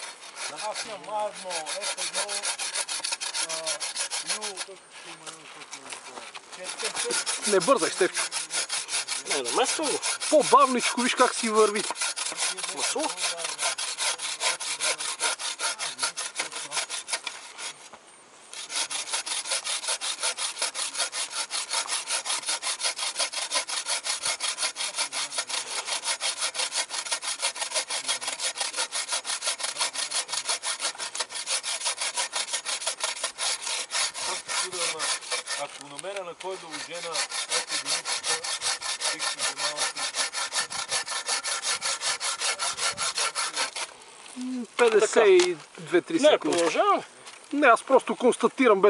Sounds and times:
Rub: 0.0 - 17.9, 18.5 - 43.9
Wood: 0.0 - 18.0, 18.6 - 43.9
Sawing: 0.0 - 48.9.

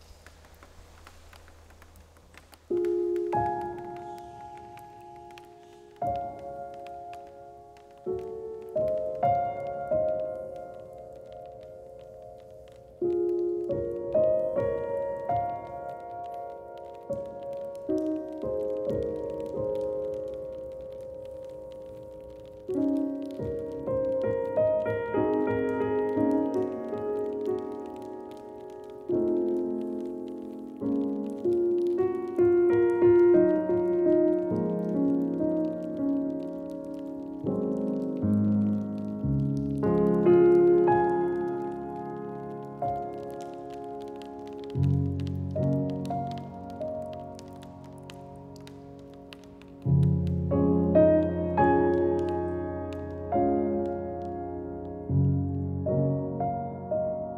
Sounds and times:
Raindrop: 0.0 - 57.3.

